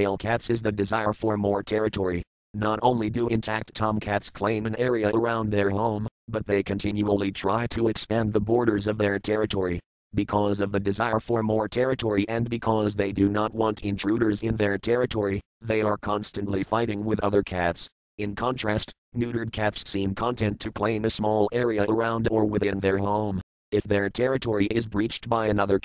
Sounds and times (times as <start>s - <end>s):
Speech: 0.0s - 25.8s.